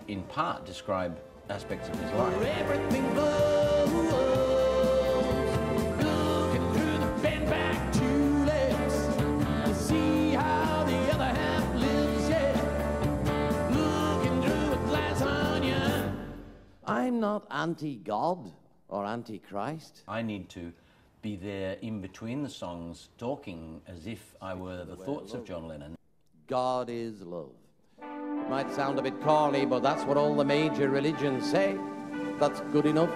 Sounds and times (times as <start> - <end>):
Speech: 16.9 - 27.6, 32.4 - 33.1.